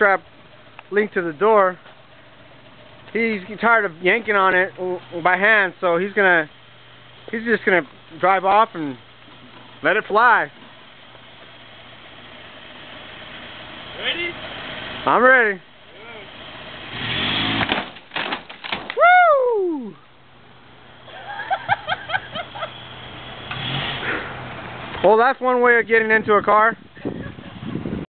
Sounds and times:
Car: 0:00.0 - 0:28.1
Speech: 0:03.1 - 0:06.5, 0:09.8 - 0:10.5, 0:14.0 - 0:14.4, 0:25.0 - 0:26.8.

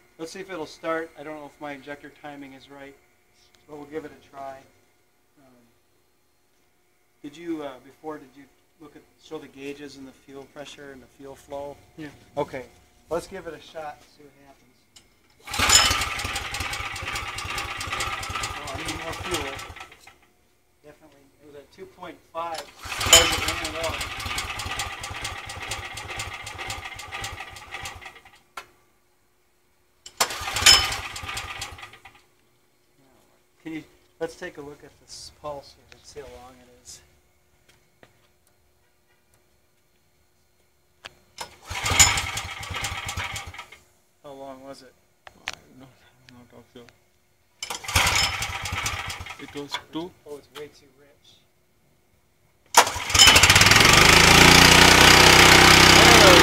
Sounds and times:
Speech: 0:00.2 - 0:03.0, 0:03.7 - 0:04.7, 0:07.2 - 0:14.8, 0:18.6 - 0:19.6, 0:20.8 - 0:24.0, 0:33.0 - 0:37.1, 0:44.2 - 0:47.0, 0:49.4 - 0:51.5, 0:56.0 - 0:56.4
Engine starting: 0:15.4 - 0:20.2, 0:22.6 - 0:28.4, 0:30.1 - 0:32.2, 0:41.4 - 0:43.8, 0:47.6 - 0:49.8, 0:52.7 - 0:56.4.

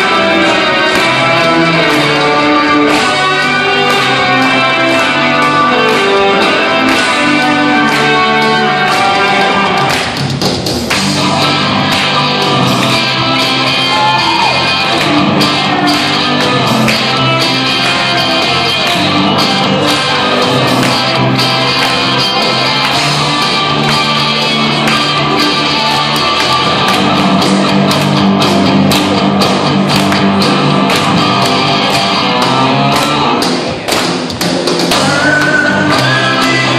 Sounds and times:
Music: 0:00.0 - 0:36.7.

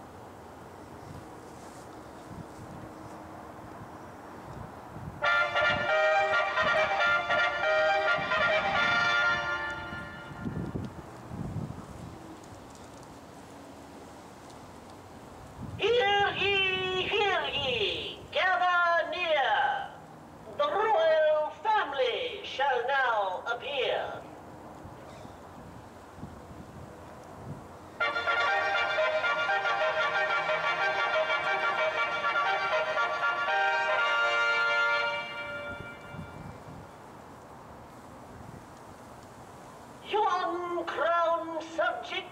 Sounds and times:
Music: 0:05.2 - 0:10.5, 0:28.0 - 0:36.5
Speech: 0:15.8 - 0:24.3, 0:40.0 - 0:42.3.

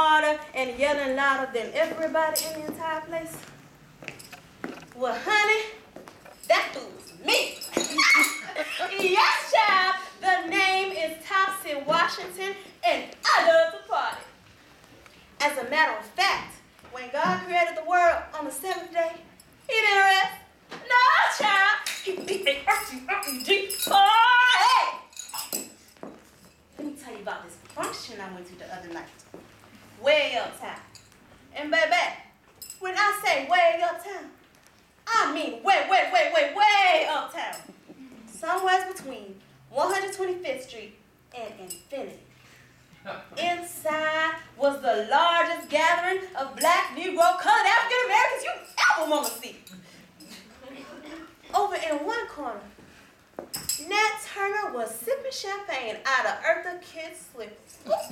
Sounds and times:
Narration, monologue: 0:00.0 - 0:58.1.

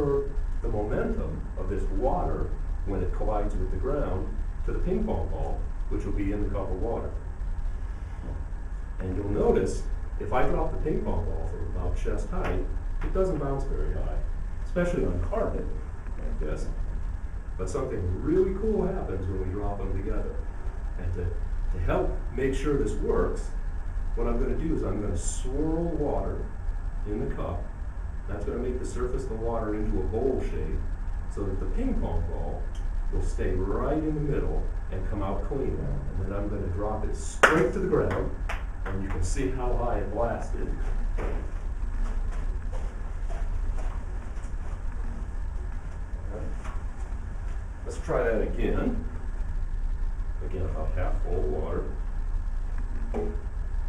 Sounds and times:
Speech: 0:00.0 - 0:07.2, 0:09.0 - 0:16.8, 0:17.6 - 0:20.4, 0:21.0 - 0:23.6, 0:24.2 - 0:27.7, 0:28.3 - 0:40.8, 0:47.8 - 0:49.1, 0:50.4 - 0:52.0.

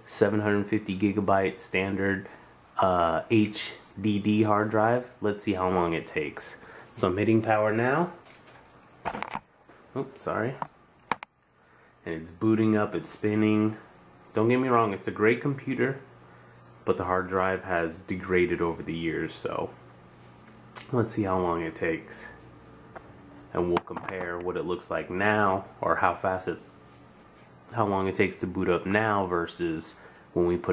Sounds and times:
Speech: 0:00.0 - 0:08.2, 0:10.0 - 0:10.7, 0:12.0 - 0:16.1, 0:16.8 - 0:19.8, 0:20.8 - 0:22.5, 0:23.5 - 0:26.7, 0:27.7 - 0:30.7
Inside, small room: 0:00.0 - 0:30.7.

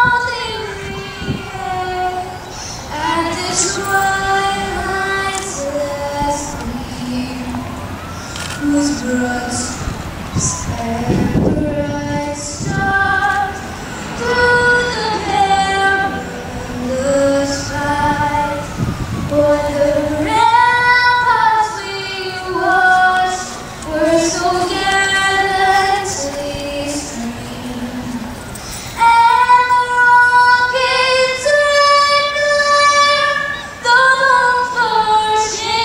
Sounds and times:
Child singing: 0:00.0 - 0:07.6, 0:08.6 - 0:28.2, 0:29.0 - 0:35.8
Female singing: 0:00.0 - 0:07.7, 0:08.6 - 0:18.7, 0:19.3 - 0:28.4, 0:29.0 - 0:35.8.

